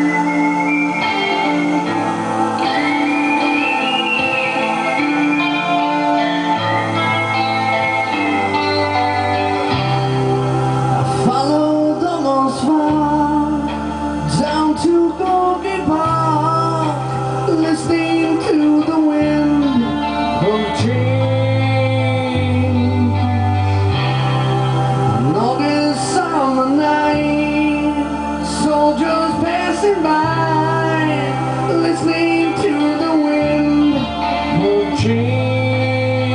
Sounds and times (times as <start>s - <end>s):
Music: 0.0s - 36.3s.